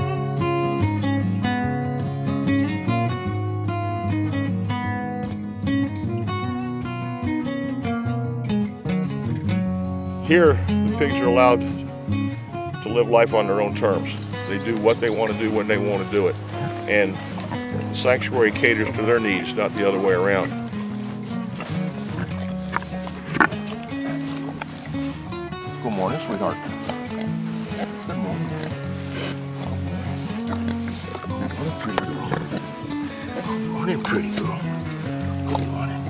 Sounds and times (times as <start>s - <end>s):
Music: 0.0s - 36.0s
Speech: 10.3s - 11.6s, 12.9s - 17.2s, 18.0s - 20.6s, 25.8s - 26.6s, 33.7s - 34.7s
Oink: 14.4s - 20.7s, 21.4s - 25.2s, 25.9s - 36.0s.